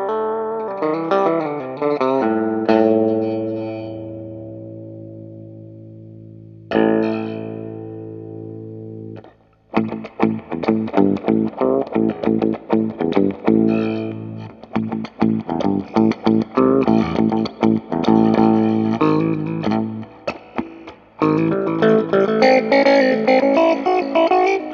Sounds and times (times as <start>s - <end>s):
Effects unit: 0.0s - 24.7s
Electric guitar: 0.0s - 24.7s.